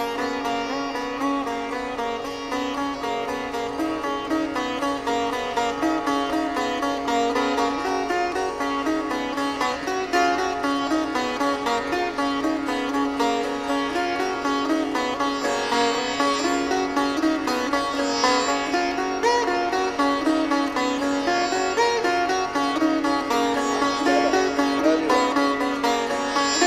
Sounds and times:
Sitar: 0.0s - 26.6s.

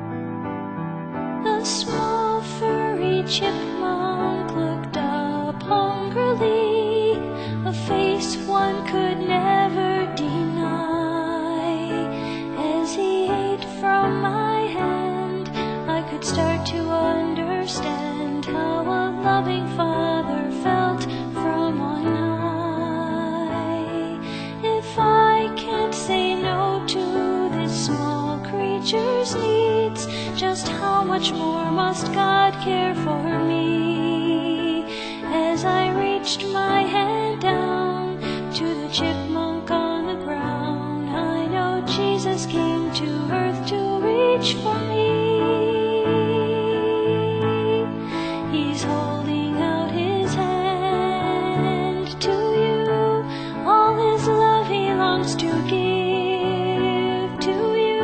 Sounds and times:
Music: 0.0s - 58.0s.

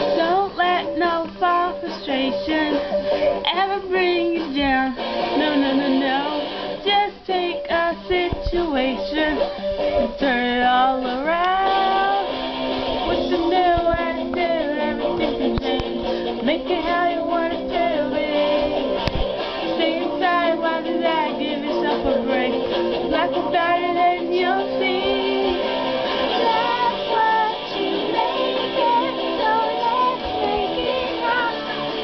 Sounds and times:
Female singing: 0.0s - 12.3s, 13.1s - 18.7s, 19.7s - 32.0s
Music: 0.0s - 32.0s
Child singing: 13.1s - 18.7s, 19.7s - 25.7s, 26.3s - 32.0s.

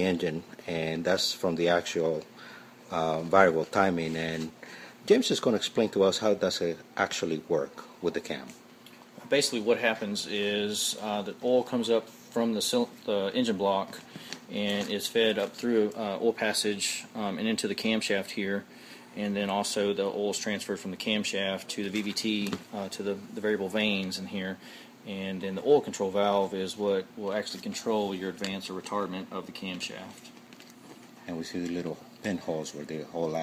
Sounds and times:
Speech: 0.0s - 2.3s, 2.9s - 8.6s, 9.2s - 30.3s, 31.2s - 33.4s.

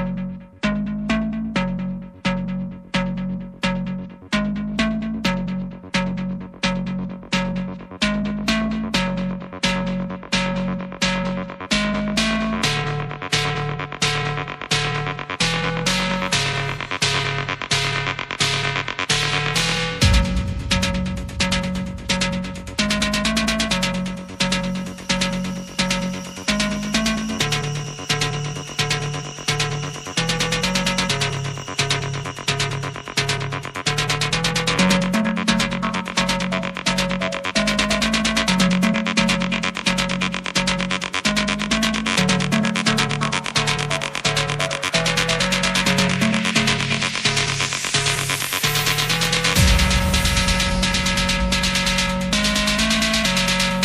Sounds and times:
Music: 0.0s - 53.8s.

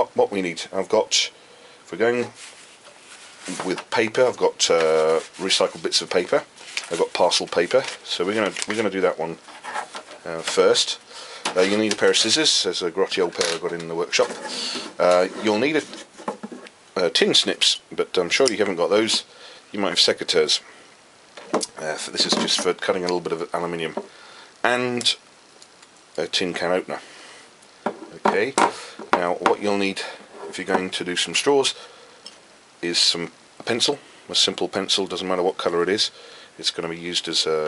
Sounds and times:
Speech: 0.0s - 2.4s, 3.5s - 9.4s, 10.2s - 16.0s, 17.0s - 20.6s, 21.7s - 24.0s, 24.6s - 25.2s, 26.2s - 27.0s, 28.1s - 31.8s, 32.8s - 37.6s.

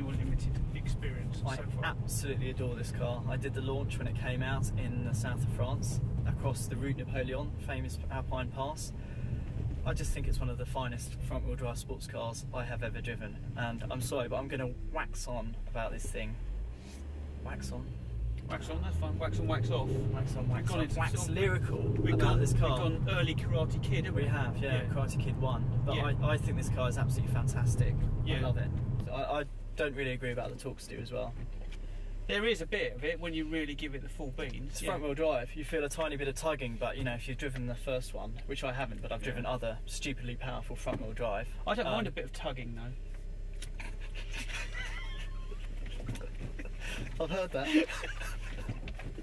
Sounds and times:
Speech: 0.0s - 8.9s, 9.8s - 16.4s, 17.4s - 17.9s, 18.5s - 31.4s, 32.3s - 43.0s, 47.2s - 47.9s
Vehicle: 0.0s - 49.2s.

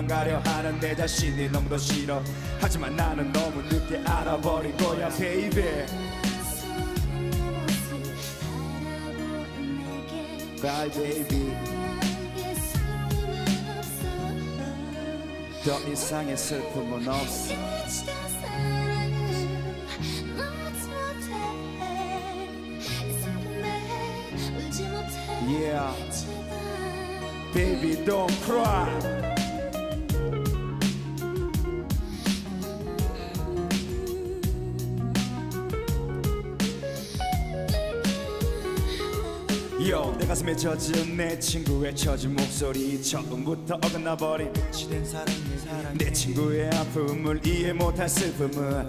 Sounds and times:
Soul music: 0.0s - 48.8s.

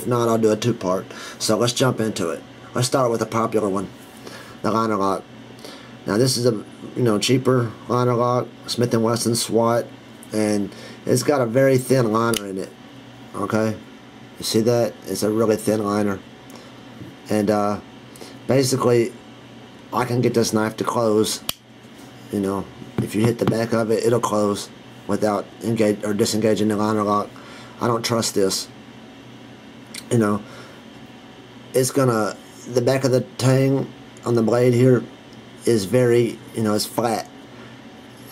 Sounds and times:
Speech: 0.0s - 4.0s, 4.6s - 5.3s, 6.0s - 13.8s, 14.4s - 16.3s, 17.2s - 17.9s, 18.5s - 19.2s, 19.9s - 21.5s, 22.3s - 28.8s, 30.0s - 30.5s, 31.7s - 37.3s.

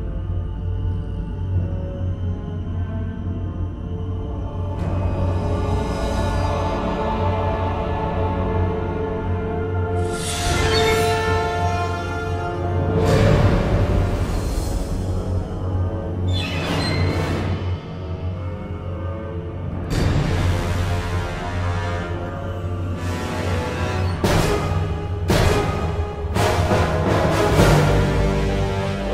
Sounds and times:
Scary music: 0.0s - 29.1s
Soundtrack music: 0.0s - 29.1s.

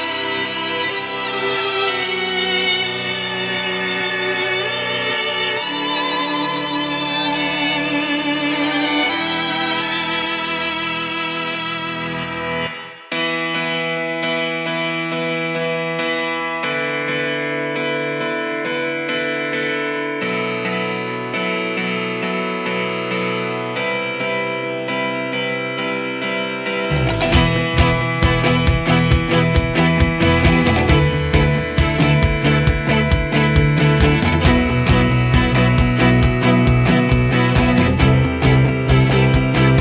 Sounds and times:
Musical instrument: 0.0s - 19.3s, 20.7s - 39.8s.

